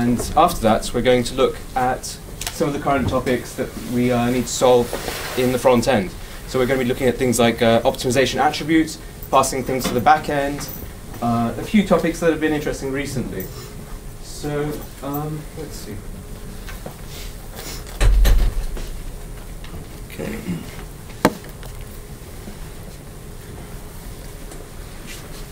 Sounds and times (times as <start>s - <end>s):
Speech: 0.0s - 13.6s, 14.2s - 16.1s, 20.1s - 20.8s.